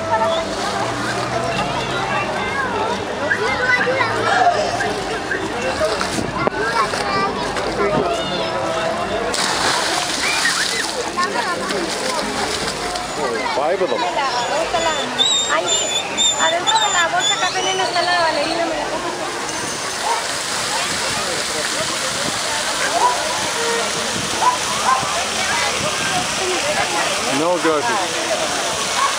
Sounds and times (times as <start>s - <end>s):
Speech: 0.0s - 19.8s, 20.6s - 29.1s
Splash, splatter: 9.3s - 13.1s, 19.8s - 29.1s.